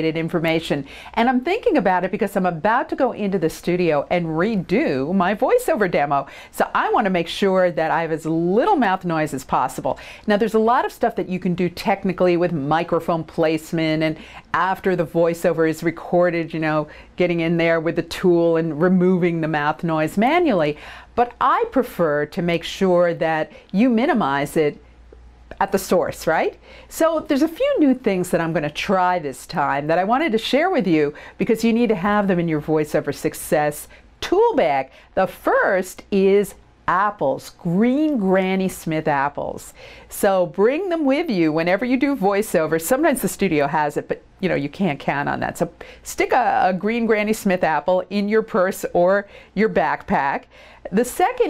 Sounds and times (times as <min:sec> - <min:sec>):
Speech: 0:00.0 - 0:24.8, 0:25.5 - 0:51.5.